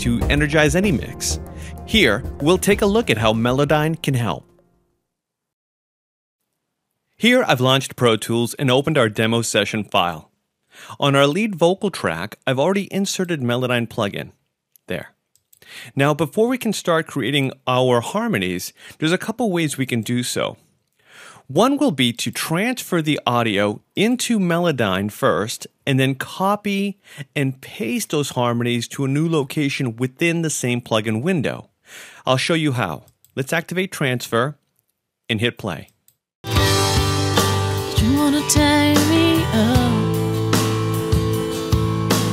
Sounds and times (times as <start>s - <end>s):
Speech: 0.0s - 4.4s, 7.2s - 10.3s, 10.9s - 15.2s, 15.9s - 20.6s, 21.4s - 34.6s, 35.3s - 36.0s.